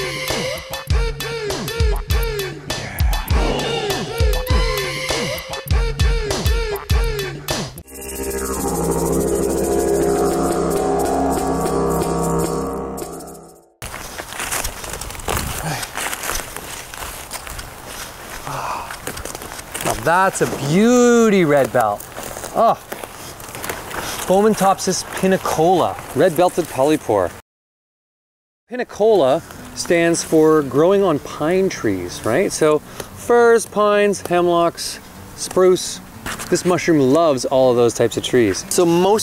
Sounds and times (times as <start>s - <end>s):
Speech: 19.8s - 22.8s, 24.3s - 27.4s, 28.7s - 39.2s.